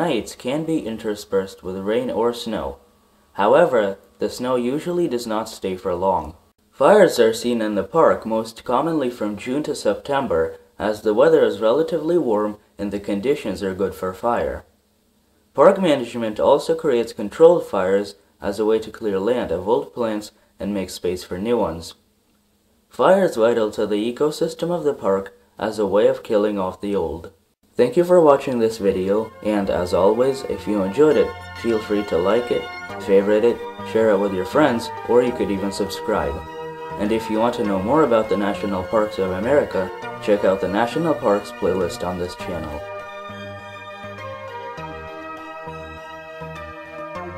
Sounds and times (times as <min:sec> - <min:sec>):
Speech: 0:00.0 - 0:02.8, 0:03.4 - 0:14.7, 0:15.6 - 0:22.0, 0:22.9 - 0:42.9.